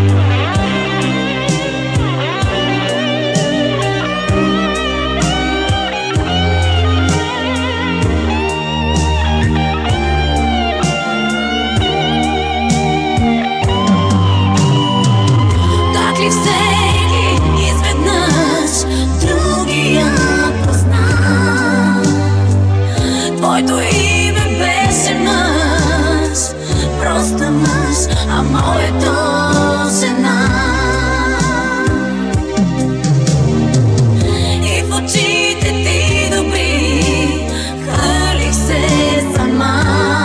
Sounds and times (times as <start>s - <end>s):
Exciting music: 0.0s - 40.2s.